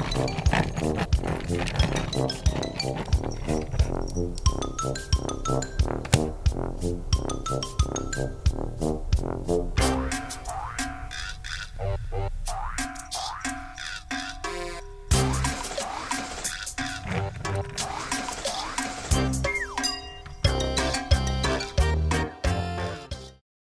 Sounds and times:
Music: 0.0 - 23.4.

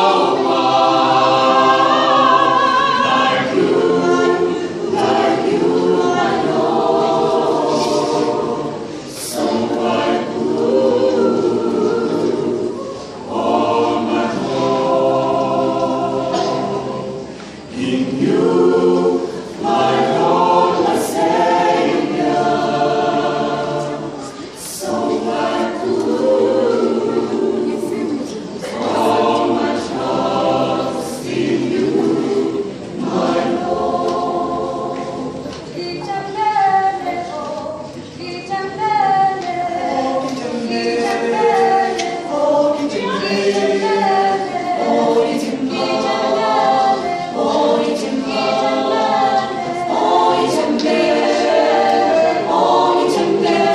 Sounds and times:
Choir: 0.0 - 53.7.

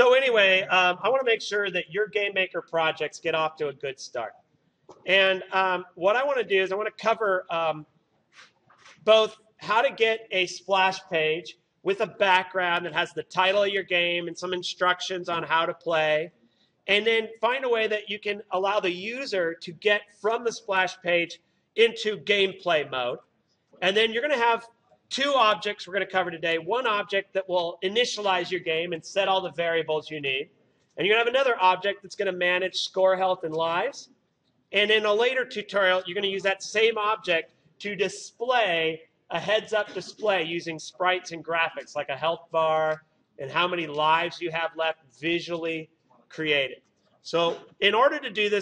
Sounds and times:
Speech: 0.0 - 7.8, 8.8 - 16.3, 16.9 - 23.2, 23.8 - 34.1, 34.8 - 48.6.

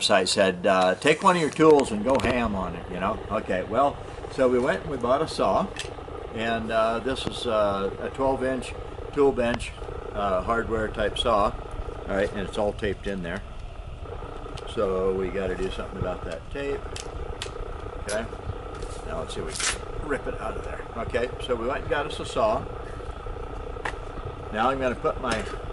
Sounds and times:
Speech: 0.0 - 5.7, 6.4 - 13.4, 14.7 - 16.9, 18.1 - 18.4, 19.1 - 22.7, 24.5 - 25.6.

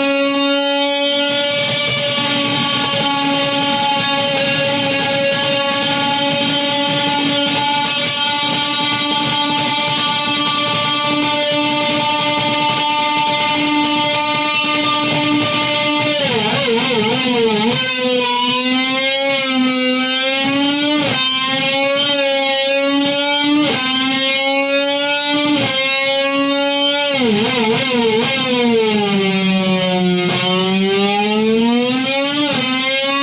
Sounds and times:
Electric guitar: 0.0 - 33.2.

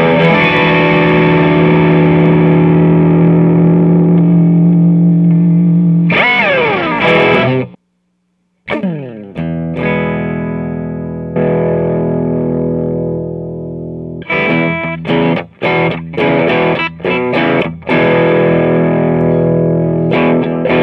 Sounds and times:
Music: 0.0 - 7.8, 8.7 - 20.8
Distortion: 0.0 - 20.8
Effects unit: 0.0 - 20.8
Inside, small room: 0.0 - 20.8.

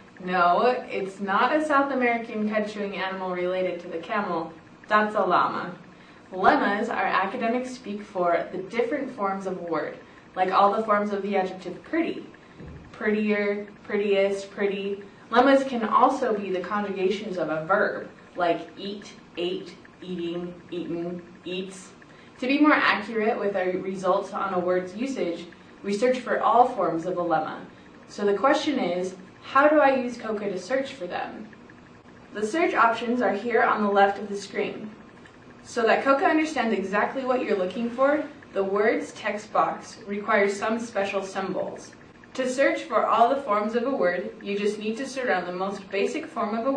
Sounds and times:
Narration, monologue: 0.0 - 46.7
Female speech, woman speaking: 0.2 - 31.6, 32.4 - 35.0, 35.6 - 46.7.

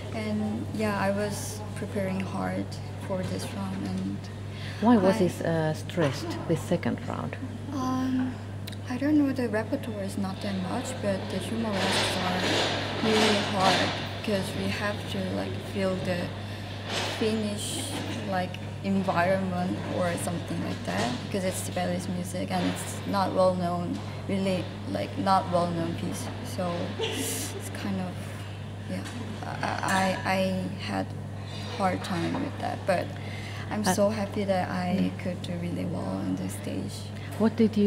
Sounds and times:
Speech: 0.1 - 16.3, 31.8 - 37.8.

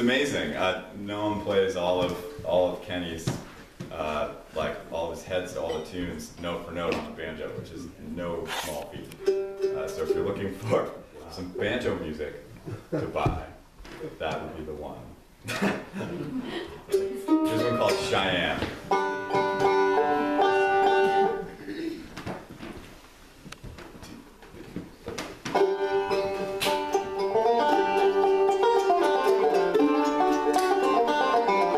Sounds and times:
Speech: 0.0 - 9.2, 9.8 - 15.2, 17.4 - 18.8
Banjo: 9.2 - 12.0, 16.8 - 22.0, 25.5 - 31.7.

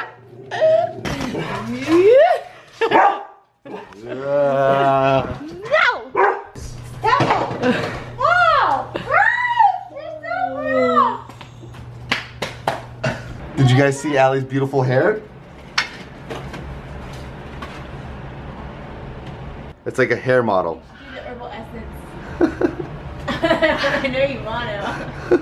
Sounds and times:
Bow-wow: 2.9 - 3.4, 6.2 - 6.5.

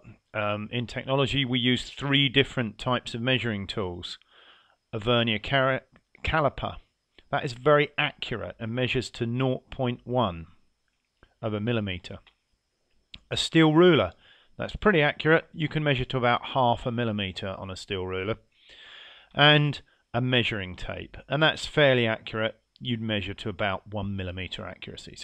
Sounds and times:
Speech: 0.0 - 4.2, 5.0 - 10.5, 11.4 - 12.2, 13.2 - 18.4, 19.4 - 25.2.

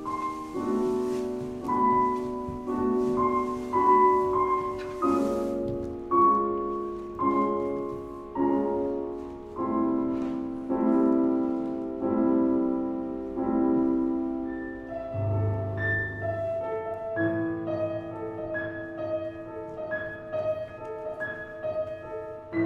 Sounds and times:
Classical music: 0.0 - 22.6.

